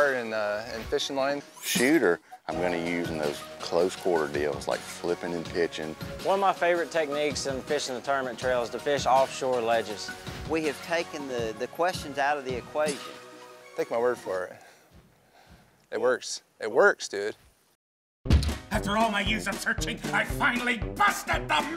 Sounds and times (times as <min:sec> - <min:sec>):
Speech: 0:00.0 - 0:13.1, 0:13.8 - 0:14.6, 0:15.9 - 0:17.4, 0:18.7 - 0:21.7
Music: 0:00.0 - 0:14.8, 0:18.3 - 0:21.7.